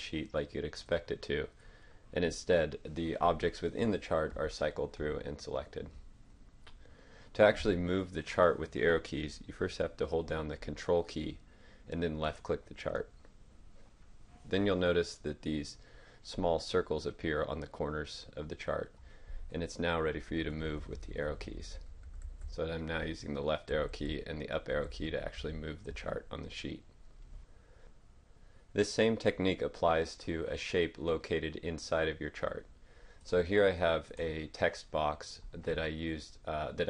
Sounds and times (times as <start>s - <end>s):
Speech: 0.0s - 6.0s, 7.4s - 13.2s, 14.4s - 21.9s, 22.5s - 27.0s, 28.8s - 36.9s.